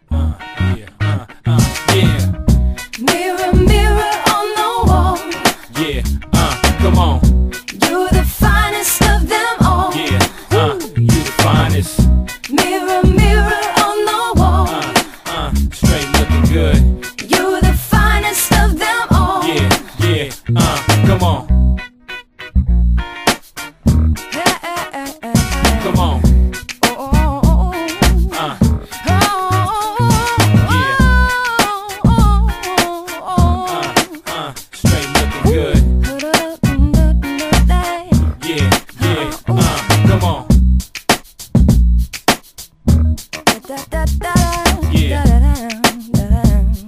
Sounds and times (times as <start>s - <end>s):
Pop music: 0.5s - 21.5s, 23.2s - 41.2s, 43.2s - 46.8s.